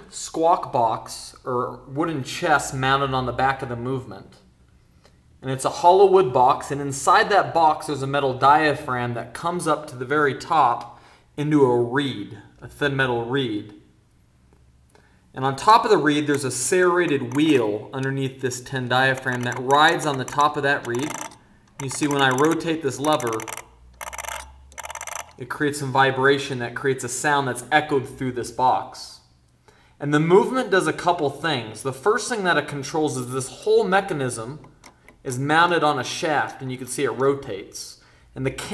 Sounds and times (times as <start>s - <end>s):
Speech: 0.0s - 4.4s, 5.4s - 13.8s, 15.4s - 21.2s, 21.8s - 23.5s, 25.4s - 29.3s, 30.0s - 34.6s, 35.2s - 38.7s.